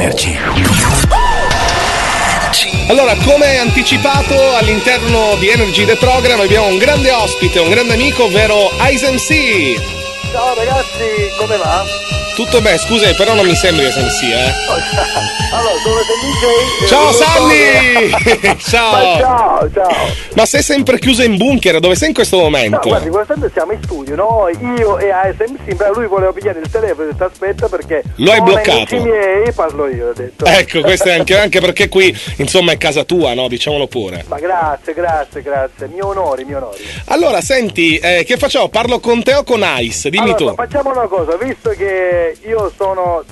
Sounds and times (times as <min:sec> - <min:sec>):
Radio: 0:00.0 - 0:01.1, 0:10.4 - 0:20.4, 0:22.5 - 0:31.6, 0:40.1 - 0:41.8
Speech: 0:00.0 - 0:01.1, 0:02.6 - 0:43.3
Music: 0:00.0 - 0:43.3.